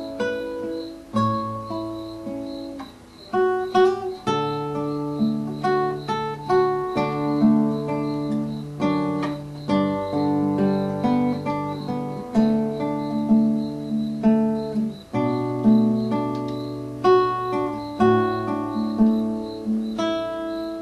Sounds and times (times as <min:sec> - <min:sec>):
Acoustic guitar: 0:00.0 - 0:20.8.